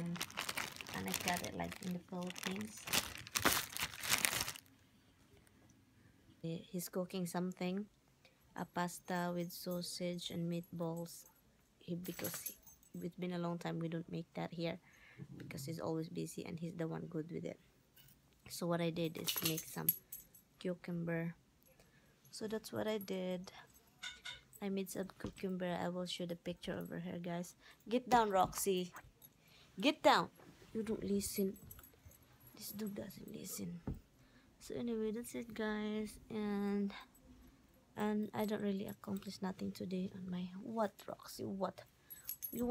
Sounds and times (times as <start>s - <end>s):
Crumpling, crinkling: 0.0s - 4.7s
Inside, small room: 0.0s - 42.7s
Speech: 1.0s - 2.9s, 6.4s - 7.9s, 8.6s - 14.8s, 15.4s - 17.6s, 18.5s - 19.9s, 22.4s - 23.6s, 24.6s - 29.0s, 29.8s - 31.6s, 32.6s - 34.0s, 34.6s - 37.1s, 38.0s - 41.8s.